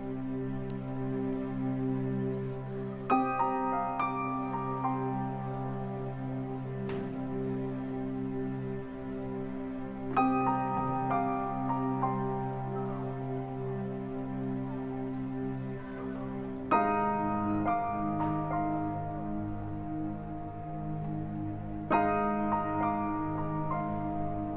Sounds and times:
Music: 0.0s - 24.5s.

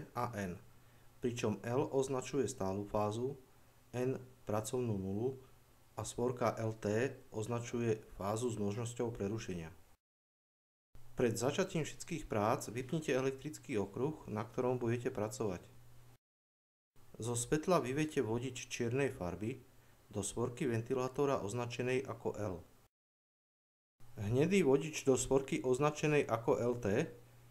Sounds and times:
Speech: 0.0s - 0.6s, 1.2s - 9.8s, 11.2s - 15.7s, 17.2s - 22.7s, 24.2s - 27.2s.

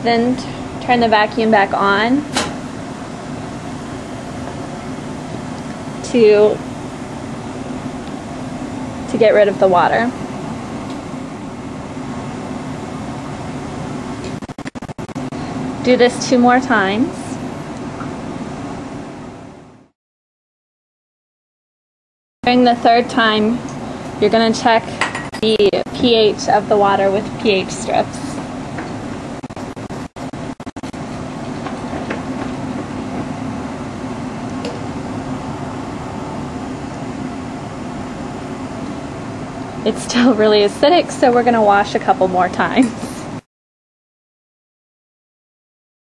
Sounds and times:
Speech: 0.0s - 2.3s, 6.1s - 6.6s, 9.1s - 10.2s, 15.8s - 17.4s, 22.5s - 23.6s, 24.2s - 28.4s, 39.8s - 43.3s.

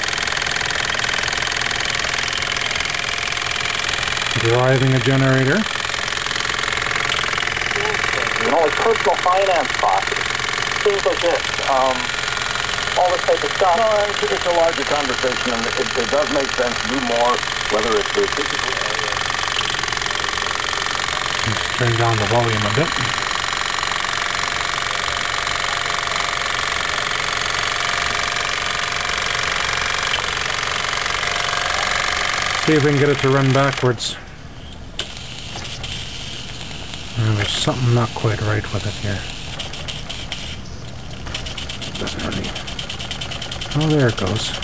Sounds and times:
Speech: 4.4s - 5.7s, 7.8s - 10.2s, 10.9s - 12.1s, 13.0s - 19.2s, 21.5s - 23.1s, 32.7s - 34.2s, 37.2s - 39.3s, 42.0s - 42.6s, 43.8s - 44.6s.

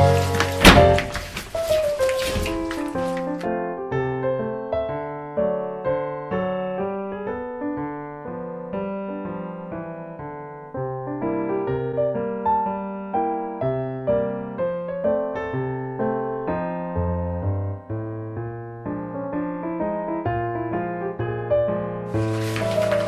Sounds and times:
Electric piano: 0.0s - 23.0s.

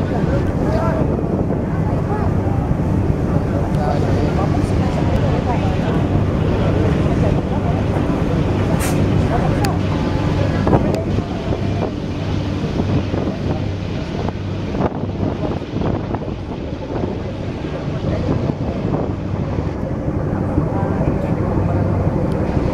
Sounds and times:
Speech: 0.0s - 14.4s, 16.4s - 22.7s
Outside, urban or manmade: 0.0s - 22.7s
Vehicle: 0.0s - 22.7s
Wind noise (microphone): 0.0s - 22.7s.

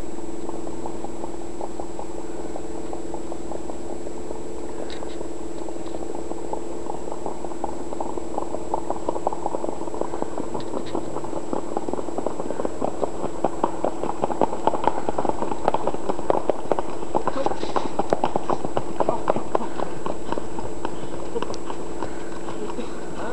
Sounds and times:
Clip-clop: 0.0s - 23.3s
Speech: 19.0s - 19.8s.

